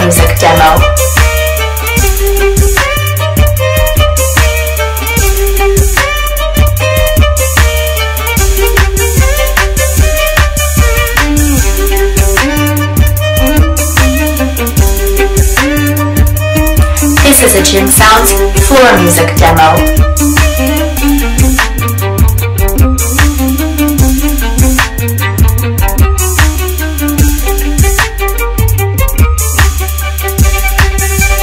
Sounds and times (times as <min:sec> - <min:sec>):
Violin, fiddle: 0:00.0 - 0:31.4.